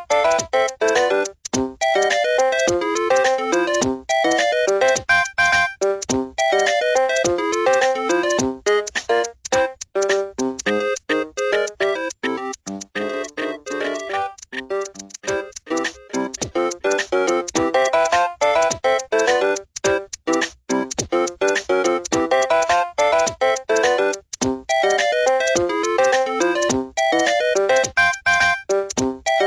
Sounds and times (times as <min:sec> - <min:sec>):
Music: 0:00.0 - 0:29.4.